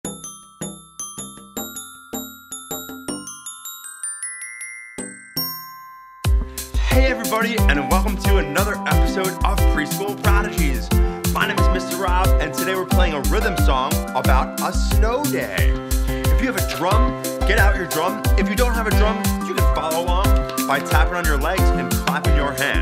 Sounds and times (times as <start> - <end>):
Glockenspiel: 0.0 - 22.8
Marimba, xylophone: 0.0 - 22.8.